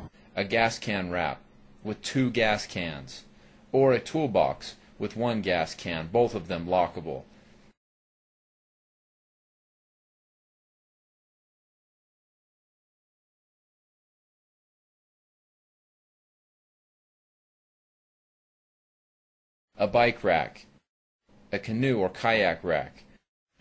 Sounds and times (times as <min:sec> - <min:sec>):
Speech: 0:00.0 - 0:07.3, 0:19.8 - 0:20.8, 0:21.5 - 0:23.1.